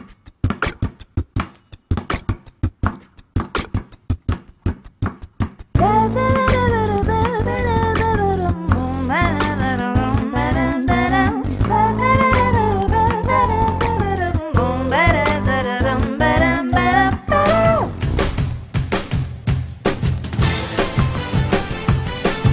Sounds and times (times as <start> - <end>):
Beatboxing: 0.0 - 18.0.